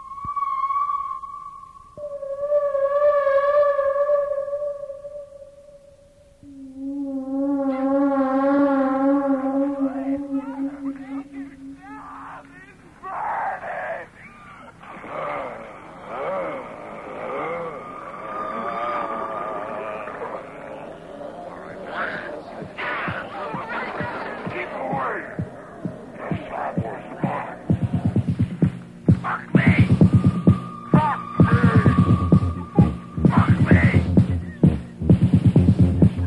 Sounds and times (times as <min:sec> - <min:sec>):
Music: 0:05.4 - 0:12.8, 0:21.9 - 0:36.2
Speech: 0:19.8 - 0:27.9, 0:29.2 - 0:30.0, 0:31.0 - 0:32.0, 0:32.7 - 0:34.2.